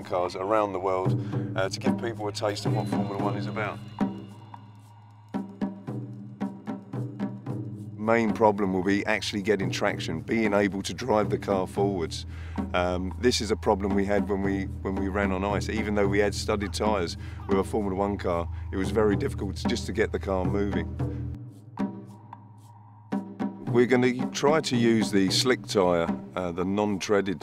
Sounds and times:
Speech: 0:00.0 - 0:03.8, 0:08.0 - 0:20.9, 0:23.6 - 0:27.4
Music: 0:00.0 - 0:27.4.

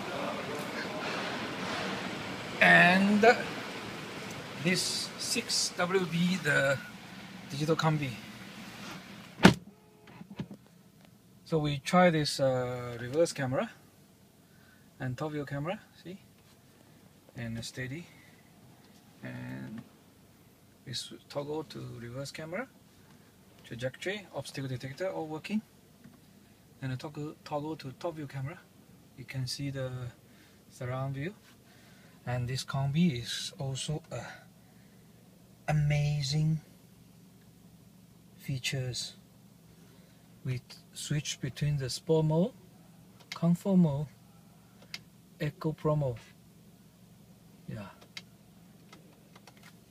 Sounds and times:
Speech: 0:02.6 - 0:03.5, 0:04.6 - 0:06.9, 0:07.5 - 0:08.2, 0:11.5 - 0:13.8, 0:15.0 - 0:16.2, 0:17.4 - 0:18.1, 0:19.2 - 0:19.9, 0:20.8 - 0:22.7, 0:23.6 - 0:25.7, 0:26.8 - 0:31.4, 0:32.3 - 0:34.4, 0:35.7 - 0:36.7, 0:38.4 - 0:39.2, 0:40.4 - 0:42.6, 0:43.4 - 0:44.2, 0:45.4 - 0:46.4, 0:47.7 - 0:48.0.

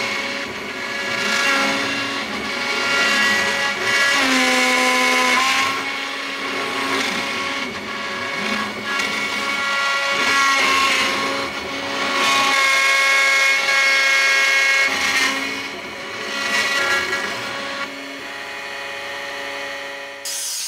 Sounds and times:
Inside, small room: 0:00.0 - 0:20.6.

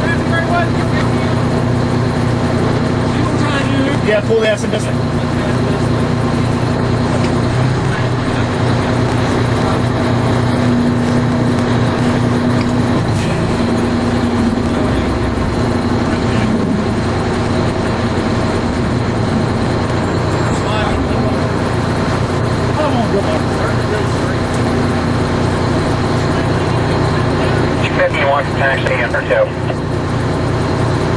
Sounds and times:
Speech: 0:00.0 - 0:01.4, 0:03.1 - 0:06.0, 0:20.5 - 0:21.5, 0:22.8 - 0:24.5, 0:26.3 - 0:29.8
Idling: 0:00.0 - 0:31.1
Vehicle: 0:00.0 - 0:31.1.

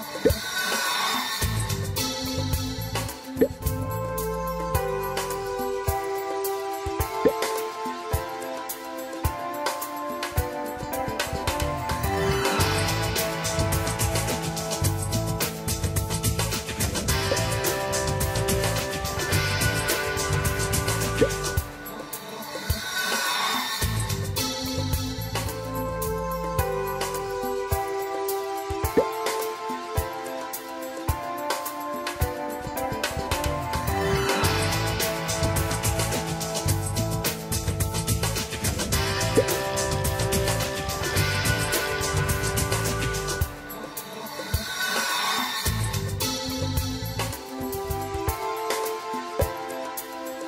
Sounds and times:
Music: 0:00.0 - 0:50.4.

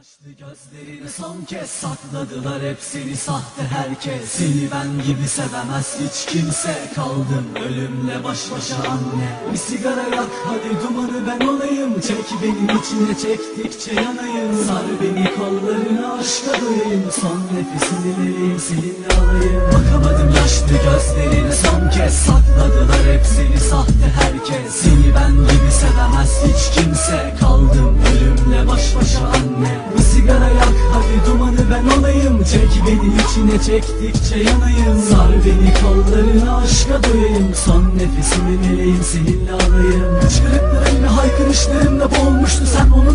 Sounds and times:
Music: 0:00.0 - 0:43.1.

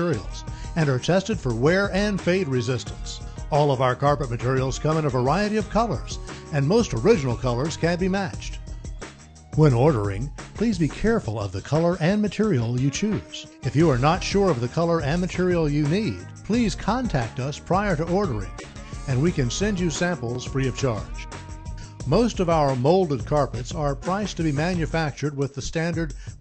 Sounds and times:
Speech: 0:00.0 - 0:08.6, 0:09.6 - 0:18.5, 0:19.1 - 0:21.2, 0:22.0 - 0:26.1
Music: 0:00.0 - 0:26.4.

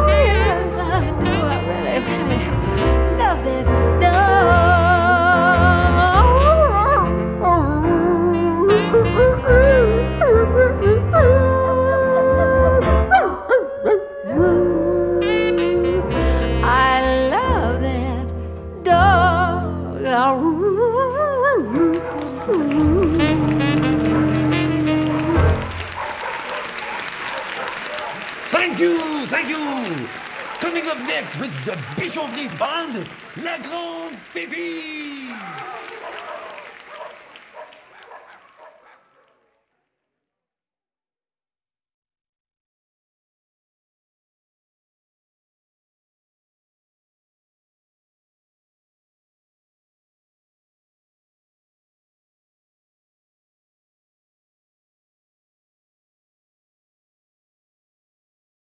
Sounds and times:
Music: 0:00.0 - 0:13.4, 0:14.3 - 0:26.0
Applause: 0:21.7 - 0:39.2
Dog: 0:22.1 - 0:28.3, 0:30.4 - 0:30.8, 0:31.8 - 0:32.1, 0:35.4 - 0:39.8
Speech: 0:28.5 - 0:35.5.

